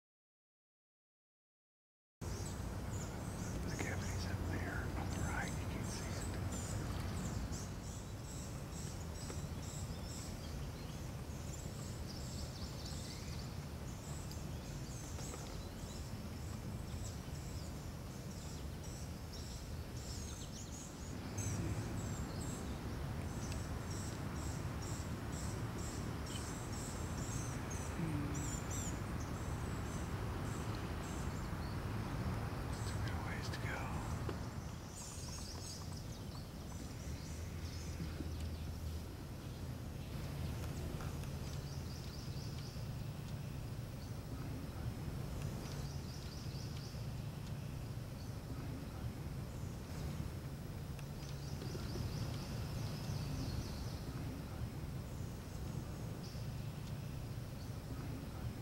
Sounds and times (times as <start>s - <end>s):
Speech: 3.7s - 6.5s, 32.9s - 34.3s.